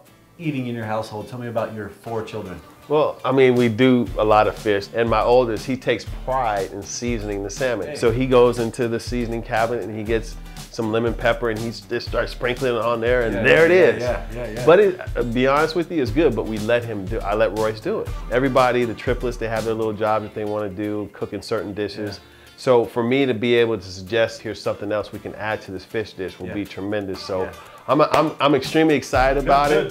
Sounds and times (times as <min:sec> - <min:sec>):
Music: 0:00.0 - 0:29.9
Speech: 0:00.4 - 0:29.9.